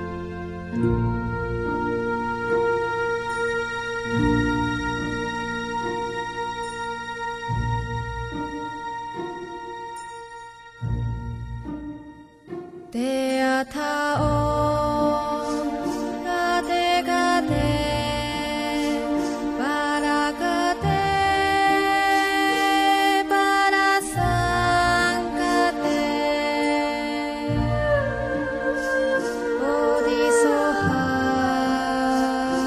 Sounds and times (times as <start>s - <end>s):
Music: 0.0s - 32.6s.